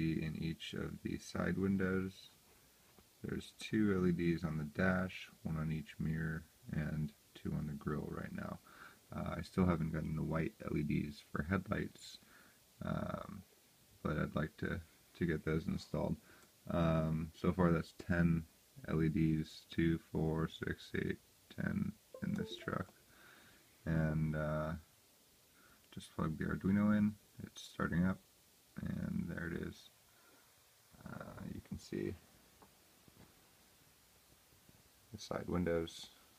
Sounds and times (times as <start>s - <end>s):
Speech: 0.0s - 2.4s, 3.2s - 22.9s, 23.9s - 24.9s, 25.9s - 30.0s, 31.0s - 32.3s, 35.1s - 36.3s.